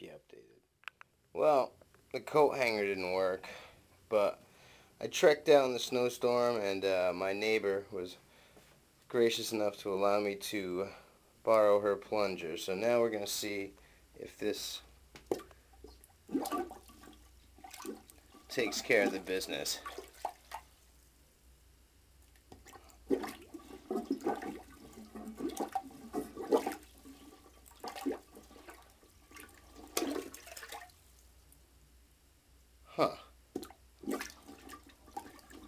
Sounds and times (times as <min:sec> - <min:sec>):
Toilet flush: 0:16.3 - 0:20.5, 0:22.6 - 0:30.9, 0:34.0 - 0:35.6.